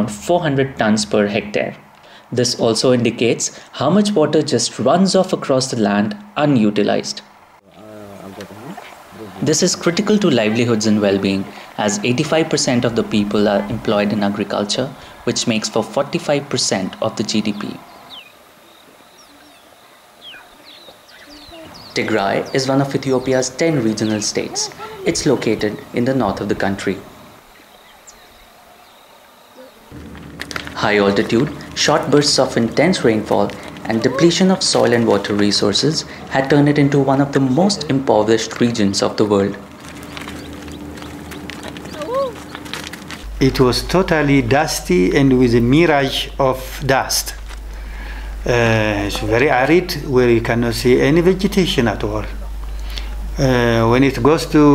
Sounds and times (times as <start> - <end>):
Speech: 0.0 - 17.8, 21.3 - 27.0, 30.8 - 39.6, 43.4 - 47.4, 48.5 - 52.4, 53.4 - 54.7
Outside, rural or natural: 0.0 - 54.7.